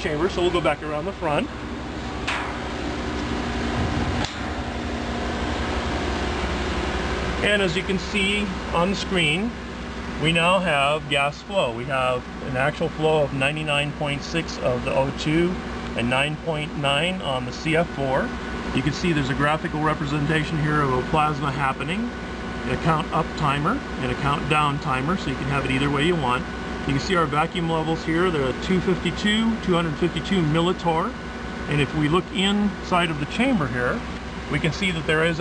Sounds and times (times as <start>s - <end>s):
Speech: 0.0s - 1.5s, 7.4s - 9.6s, 10.2s - 35.4s.